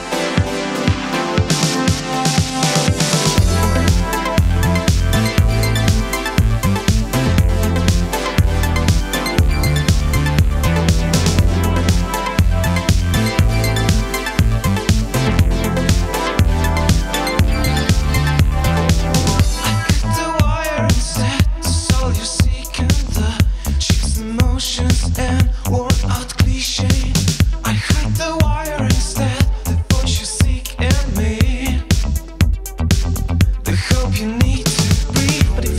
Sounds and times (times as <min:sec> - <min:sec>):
Music: 0:00.0 - 0:35.7.